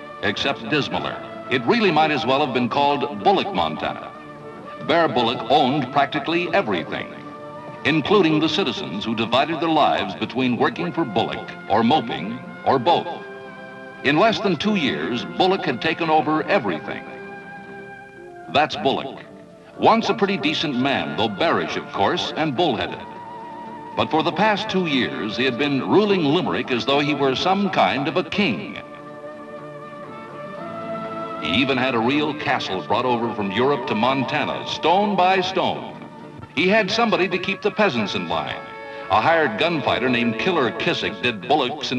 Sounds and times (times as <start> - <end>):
Music: 0.0 - 41.9
Speech: 0.2 - 4.1, 4.8 - 7.2, 7.8 - 13.2, 14.1 - 17.2, 18.5 - 19.2, 19.8 - 23.1, 24.0 - 28.9, 31.4 - 36.0, 36.6 - 41.9.